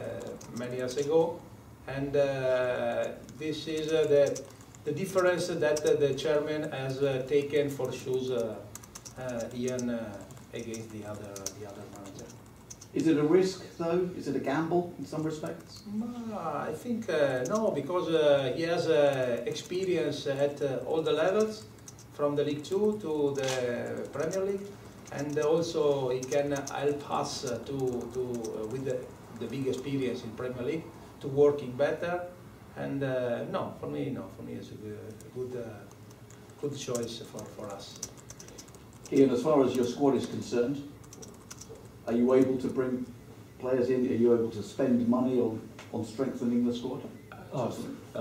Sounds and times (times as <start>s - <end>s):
Typing: 0.0s - 1.3s, 2.9s - 6.2s, 7.2s - 13.1s, 17.2s - 18.0s, 18.7s - 30.0s, 35.0s - 42.0s.